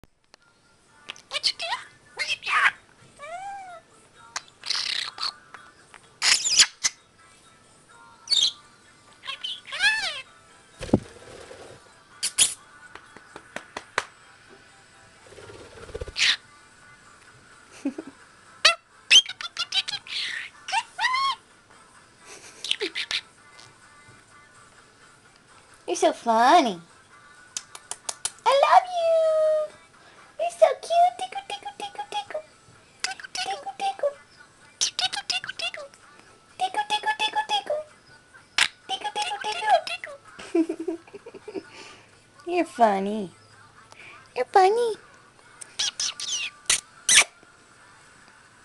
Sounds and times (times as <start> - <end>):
Music: 0.1 - 48.6
Domestic animals, pets: 1.3 - 3.9, 45.6 - 47.3
Bird: 4.6 - 5.4, 15.4 - 16.4, 45.7 - 47.3.